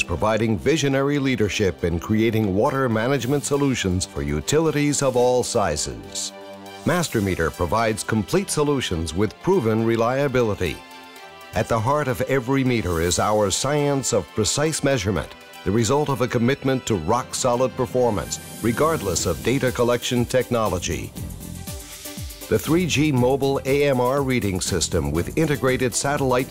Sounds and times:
Speech: 0.0 - 10.8, 11.6 - 21.2, 22.5 - 26.5
Music: 0.0 - 26.5.

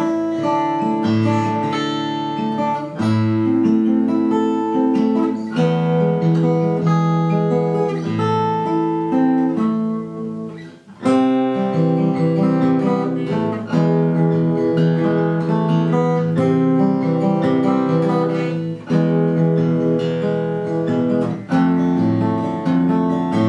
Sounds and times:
Acoustic guitar: 0.0 - 23.4
Strum: 0.0 - 23.4.

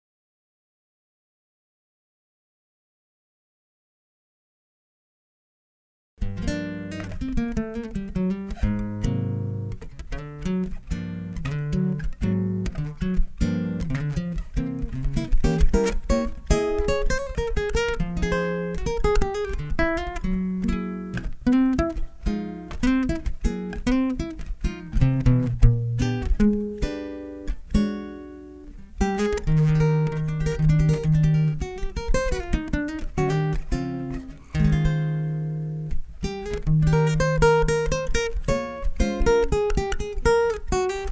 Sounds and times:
Acoustic guitar: 6.2 - 41.1.

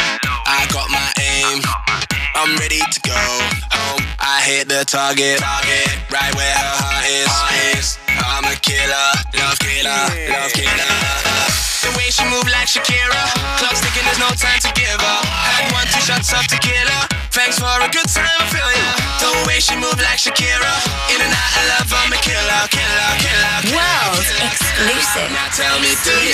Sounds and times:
Music: 0.0 - 26.3.

